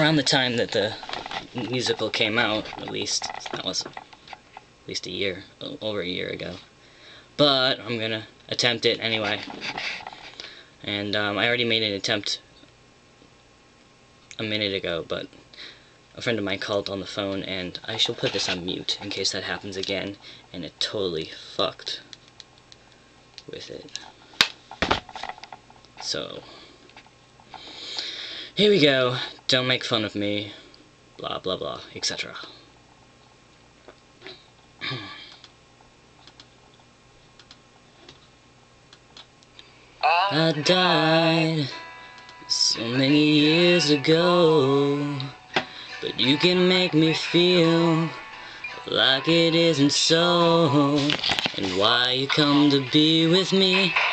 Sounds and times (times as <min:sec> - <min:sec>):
Speech: 0:00.0 - 0:01.0, 0:01.6 - 0:03.9, 0:04.9 - 0:06.7, 0:07.4 - 0:09.5, 0:10.8 - 0:12.4, 0:14.4 - 0:15.4, 0:16.2 - 0:22.1, 0:23.5 - 0:24.0, 0:26.0 - 0:26.5, 0:28.6 - 0:30.6, 0:31.2 - 0:32.6.